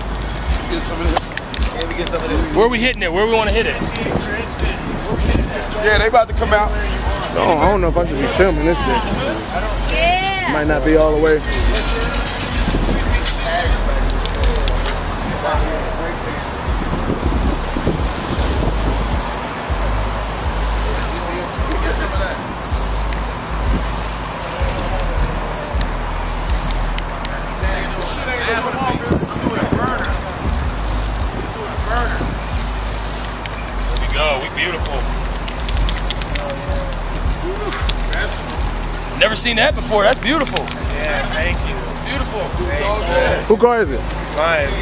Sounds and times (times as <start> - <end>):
Speech: 0.7 - 16.7, 27.4 - 30.5, 39.2 - 44.8
Spray: 20.6 - 21.2, 22.6 - 23.2, 23.8 - 24.7, 25.4 - 26.9, 30.7 - 33.5.